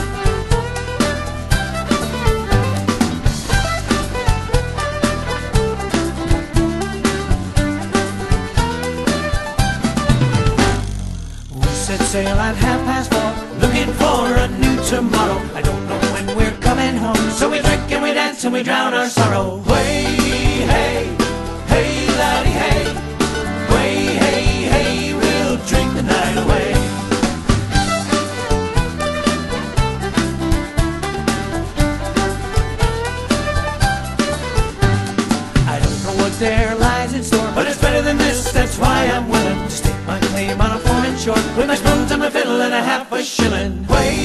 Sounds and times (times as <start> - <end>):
Music: 0.0 - 44.2.